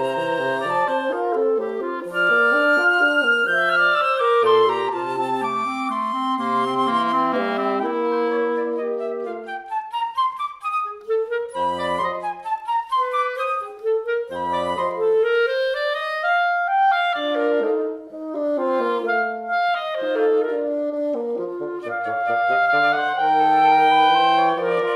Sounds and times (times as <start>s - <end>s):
Brass instrument: 0.0s - 24.9s
Clarinet: 0.0s - 24.9s
Flute: 0.0s - 24.9s.